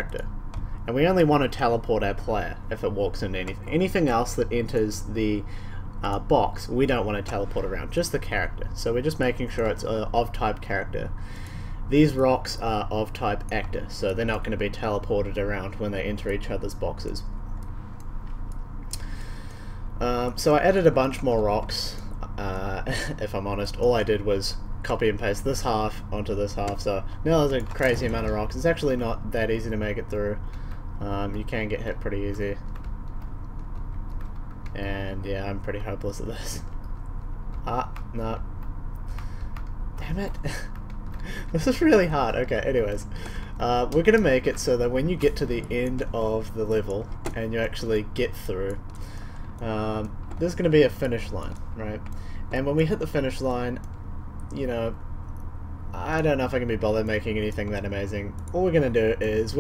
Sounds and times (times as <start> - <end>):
Speech: 0.0 - 0.3, 0.9 - 11.1, 11.9 - 17.3, 20.0 - 30.4, 31.0 - 32.6, 34.7 - 36.7, 37.6 - 38.4, 40.0 - 40.7, 41.5 - 48.8, 49.6 - 53.9, 54.5 - 55.0, 56.0 - 59.6.